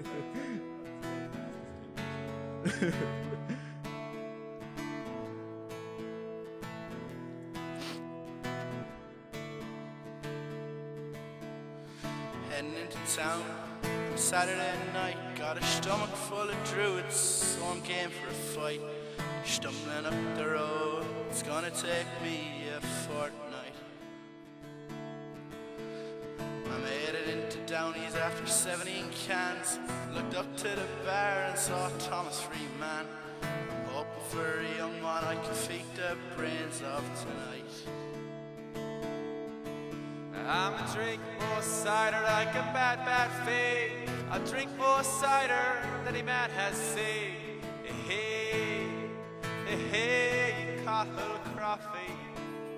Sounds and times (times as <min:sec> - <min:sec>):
Music: 0:00.0 - 0:52.7.